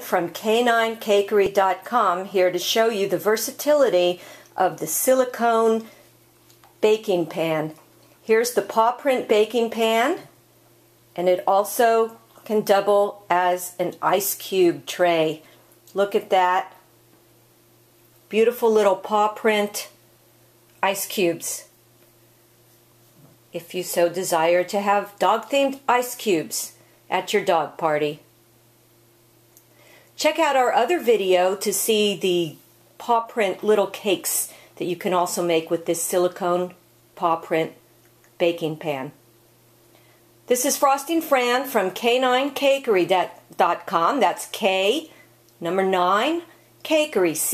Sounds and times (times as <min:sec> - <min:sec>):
Speech: 0:00.0 - 0:06.0, 0:06.8 - 0:10.4, 0:11.2 - 0:16.9, 0:18.3 - 0:20.0, 0:20.8 - 0:21.8, 0:23.5 - 0:28.3, 0:30.2 - 0:37.8, 0:38.4 - 0:39.2, 0:40.5 - 0:47.5.